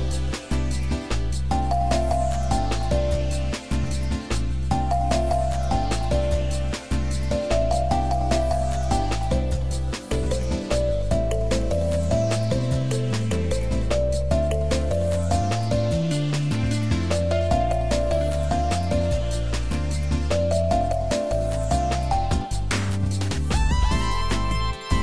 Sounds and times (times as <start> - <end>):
Music: 0.0 - 25.0.